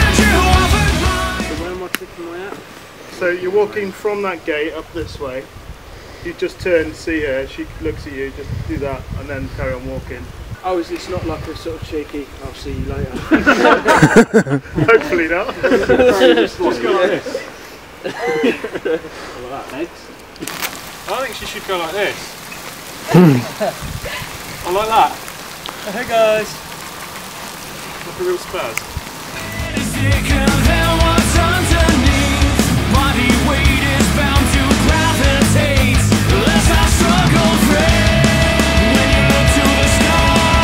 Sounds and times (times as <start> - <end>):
Raindrop: 20.1 - 40.6.